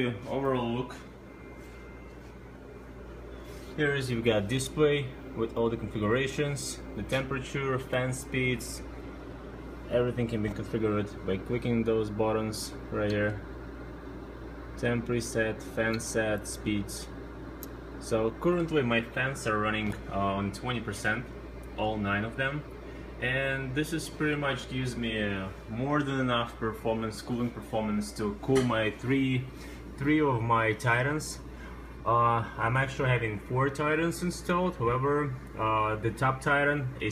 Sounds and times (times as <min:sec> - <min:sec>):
Speech: 0:00.0 - 0:01.1, 0:03.8 - 0:08.9, 0:09.9 - 0:13.5, 0:14.8 - 0:17.2, 0:18.0 - 0:37.1.